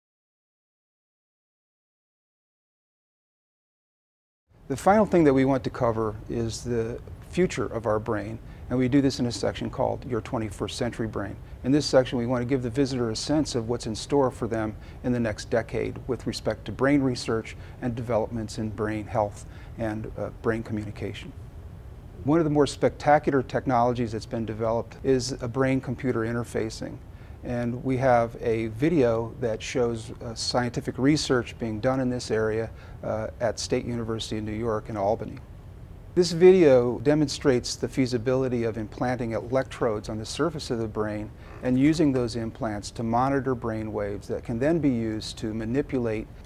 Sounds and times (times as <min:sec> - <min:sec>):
Speech: 0:04.7 - 0:21.4, 0:22.2 - 0:35.4, 0:36.2 - 0:46.3.